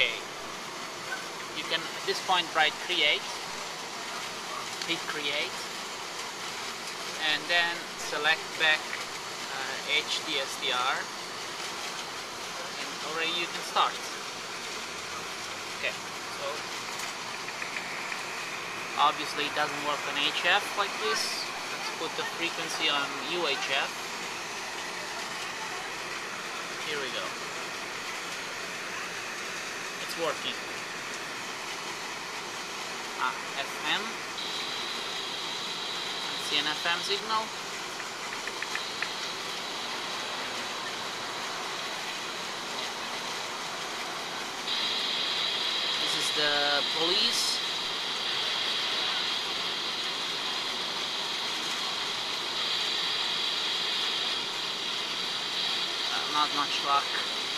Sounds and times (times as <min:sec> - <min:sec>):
Speech: 0:00.0 - 0:00.2, 0:01.6 - 0:03.5, 0:04.1 - 0:05.7, 0:07.2 - 0:11.1, 0:12.6 - 0:14.2, 0:15.8 - 0:16.6, 0:19.0 - 0:24.0, 0:26.8 - 0:27.3, 0:30.0 - 0:30.6, 0:33.2 - 0:34.2, 0:36.3 - 0:37.5, 0:46.0 - 0:47.7, 0:56.1 - 0:57.3.